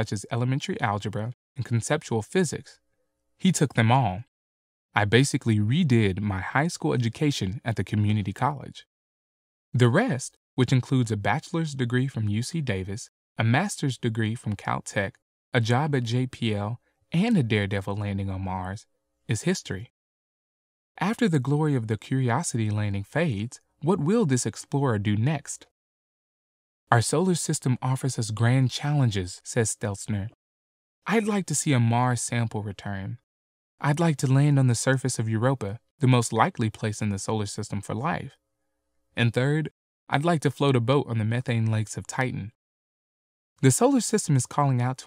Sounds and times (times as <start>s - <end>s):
Speech: 0.0s - 2.8s, 3.4s - 4.3s, 5.0s - 8.9s, 9.8s - 19.9s, 21.0s - 25.7s, 26.9s - 30.4s, 31.1s - 38.4s, 39.2s - 42.6s, 43.6s - 45.0s.